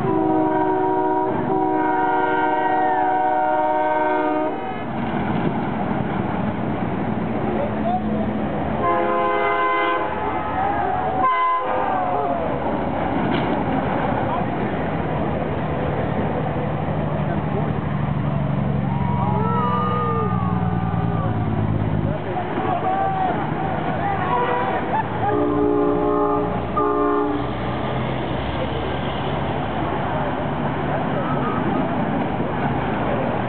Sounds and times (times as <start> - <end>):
Outside, urban or manmade: 0.0 - 33.4
Truck: 4.5 - 11.2, 12.3 - 33.4
Speech: 7.5 - 8.4, 22.0 - 25.4.